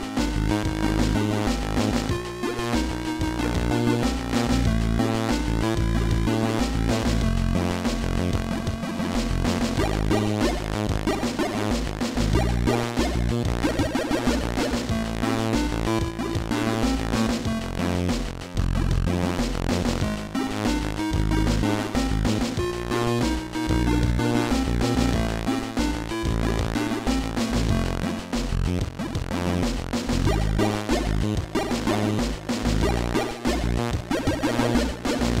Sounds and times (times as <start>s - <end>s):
Music: 0.0s - 35.4s
Sound effect: 8.5s - 15.0s, 30.1s - 35.4s.